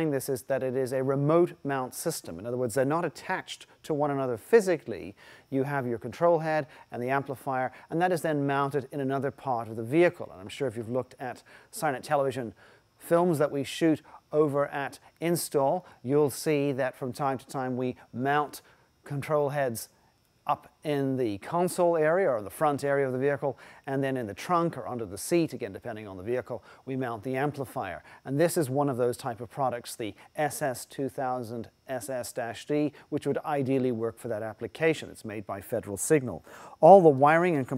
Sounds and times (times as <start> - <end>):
Speech: 0.0 - 19.9, 20.5 - 37.7.